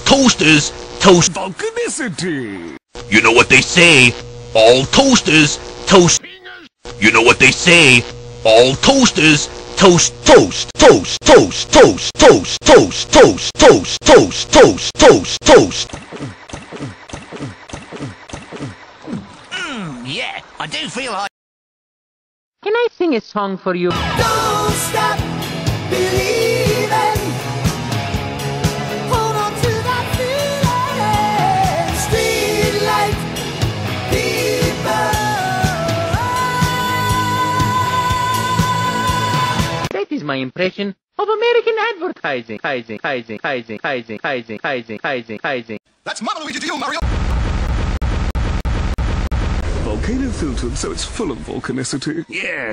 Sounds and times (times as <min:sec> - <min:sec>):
Speech: 0:00.0 - 0:15.7, 0:39.9 - 0:47.0, 0:49.9 - 0:52.7.